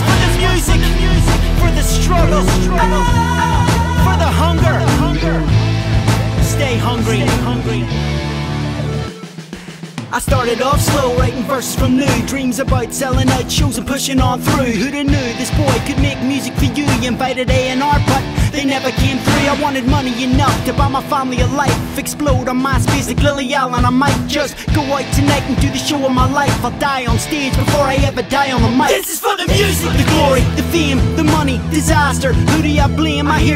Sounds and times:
Dance music: 0.0s - 33.5s.

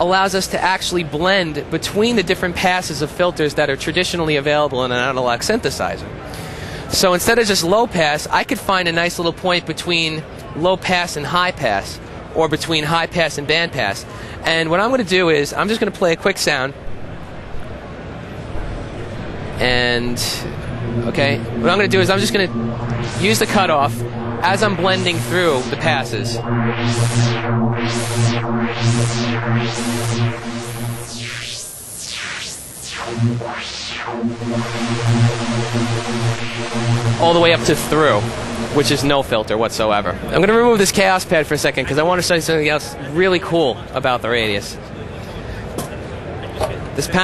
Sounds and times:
Speech: 0.0s - 6.1s, 6.8s - 16.8s, 19.6s - 22.5s, 23.2s - 26.4s, 37.2s - 47.2s
Synthesizer: 18.4s - 39.4s.

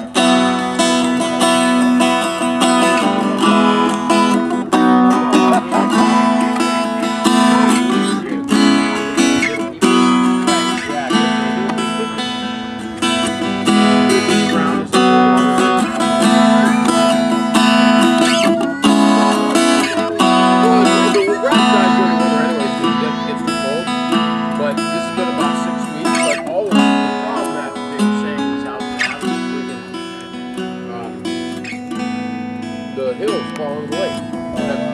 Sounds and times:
Guitar: 0.0s - 34.9s
Speech: 2.8s - 4.3s, 5.1s - 12.4s, 13.7s - 17.2s, 18.2s - 23.9s, 24.6s - 30.0s, 30.8s - 31.2s, 33.0s - 34.9s.

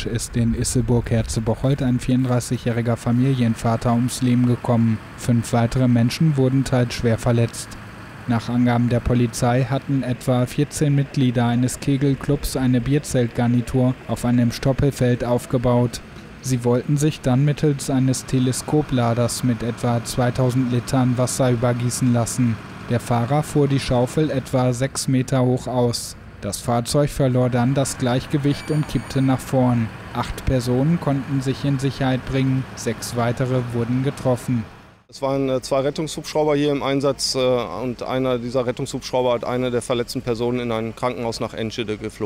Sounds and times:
Speech: 0.0s - 42.2s.

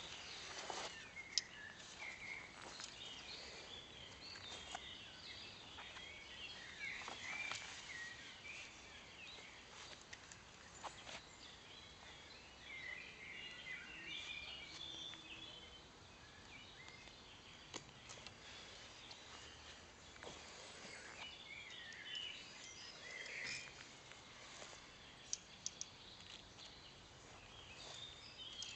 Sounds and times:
Environmental noise: 0.0s - 28.7s.

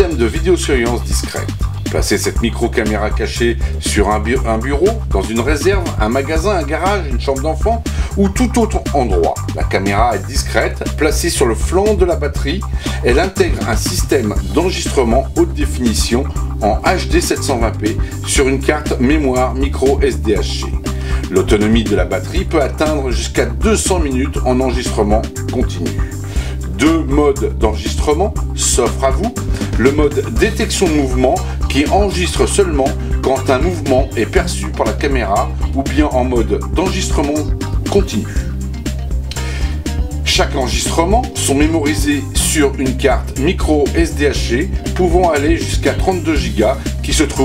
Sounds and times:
Speech: 0.0s - 38.5s, 40.3s - 47.4s
Music: 0.0s - 47.4s.

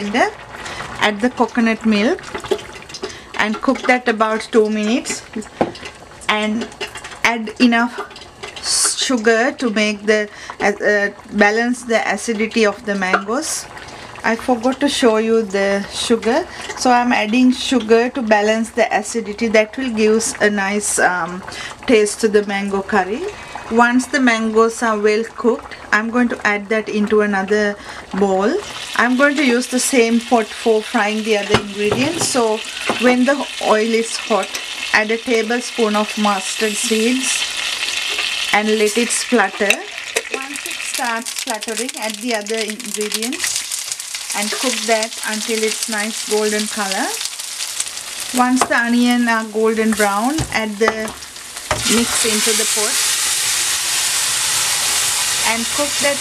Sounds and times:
Speech: 0.0s - 0.4s, 1.0s - 2.2s, 3.4s - 5.5s, 6.3s - 6.7s, 7.3s - 8.0s, 8.6s - 37.4s, 38.6s - 43.5s, 44.4s - 47.2s, 48.4s - 51.2s, 51.8s - 53.0s, 55.4s - 56.2s.

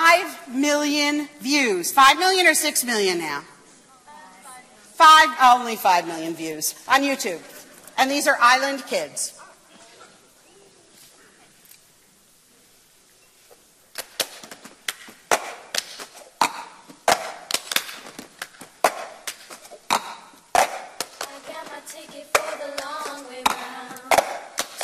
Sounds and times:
Inside, large room or hall: 0.0s - 24.8s.

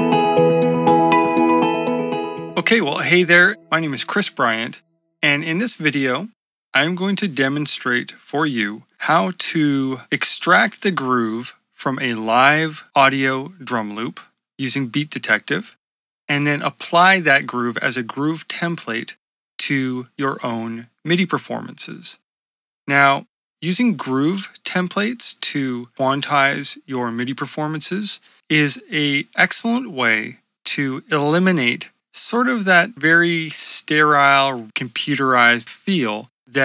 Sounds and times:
Speech: 2.6s - 22.2s, 22.9s - 36.6s.

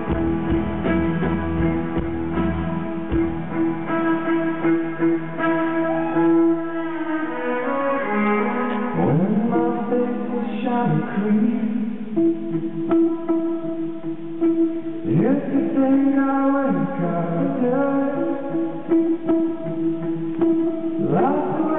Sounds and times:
Inside, large room or hall: 0.0s - 21.7s
Music: 0.0s - 21.7s.

